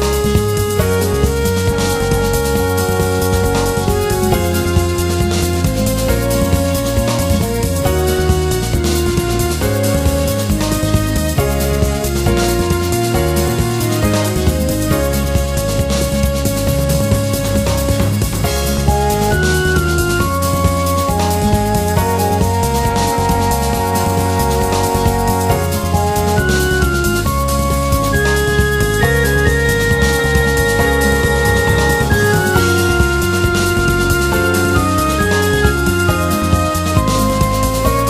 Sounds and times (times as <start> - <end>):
Music: 0.0 - 38.0.